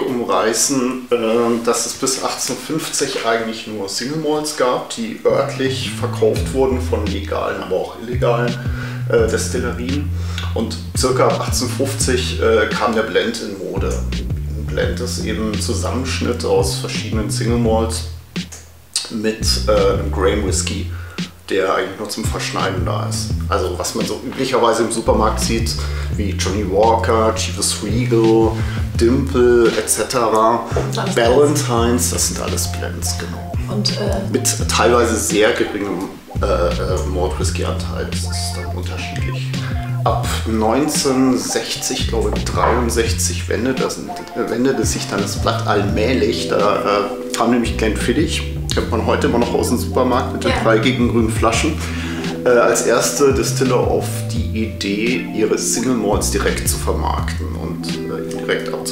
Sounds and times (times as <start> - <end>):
Speech: 0.0 - 18.1, 19.0 - 58.9
Music: 0.0 - 58.9.